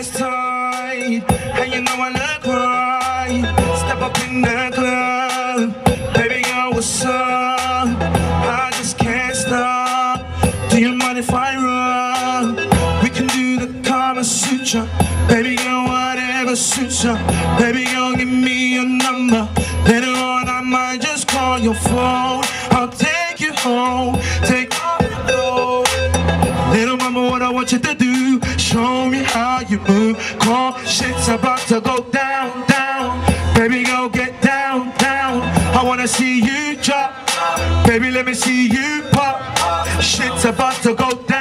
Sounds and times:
Rhythm and blues: 0.0s - 41.4s.

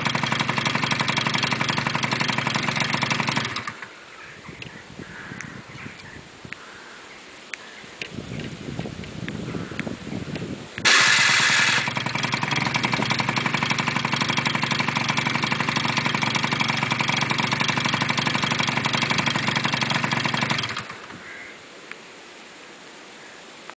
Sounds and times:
Idling: 0.0s - 4.2s, 10.8s - 21.3s
Medium engine (mid frequency): 0.0s - 4.2s, 10.8s - 21.2s
Vehicle: 0.0s - 6.3s, 8.0s - 22.9s.

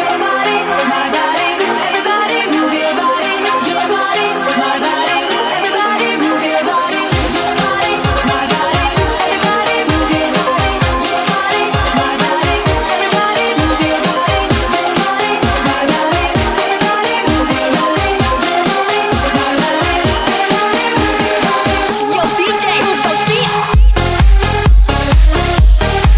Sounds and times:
Music: 0.0s - 26.1s.

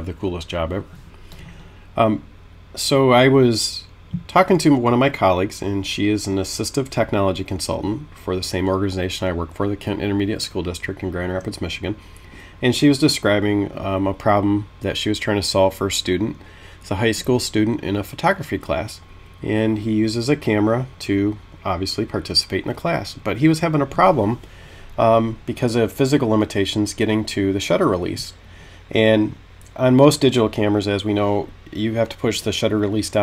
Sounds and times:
Speech: 0.0s - 1.0s, 2.0s - 12.0s, 12.6s - 24.4s, 25.0s - 33.2s.

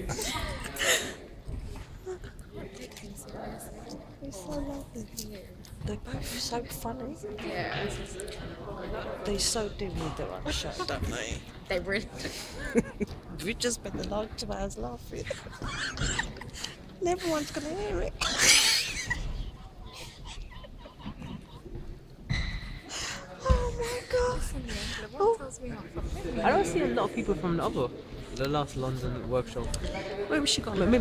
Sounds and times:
Inside, large room or hall: 0.0s - 31.0s.

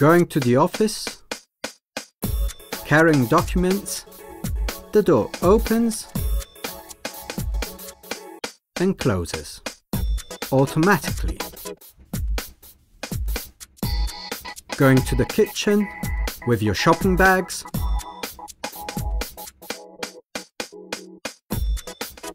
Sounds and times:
Speech: 0.0s - 1.2s, 2.9s - 4.1s, 5.0s - 6.2s, 8.8s - 9.6s, 10.5s - 11.5s, 14.8s - 17.7s
Music: 0.0s - 22.3s.

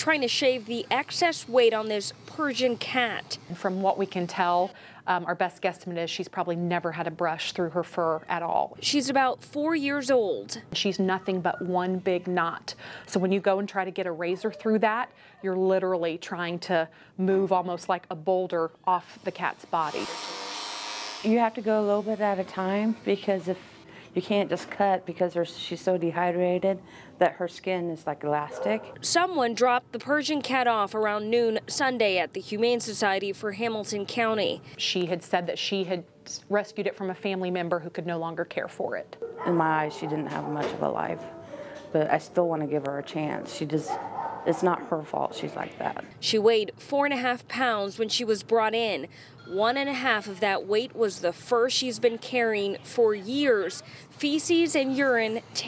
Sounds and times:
Speech: 0.0s - 20.1s, 24.2s - 41.3s, 41.9s - 55.6s.

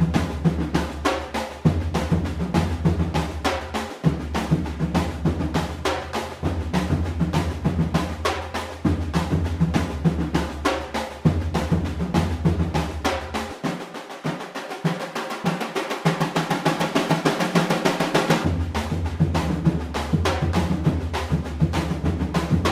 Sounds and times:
Bass drum: 0.0s - 13.6s, 17.1s - 22.7s.

